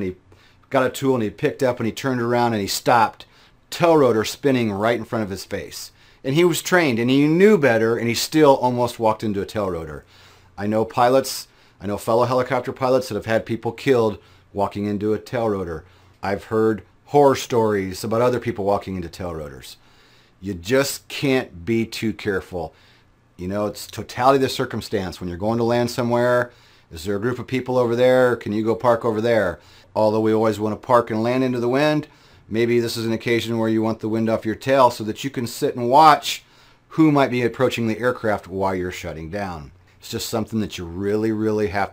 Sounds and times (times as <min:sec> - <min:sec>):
Speech: 0:00.0 - 0:19.8, 0:20.4 - 0:22.8, 0:23.4 - 0:41.9.